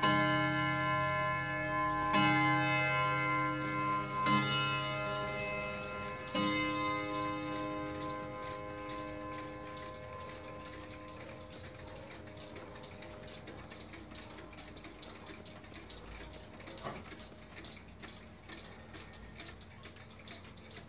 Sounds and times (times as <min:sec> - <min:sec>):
Tick-tock: 0:03.4 - 0:20.8.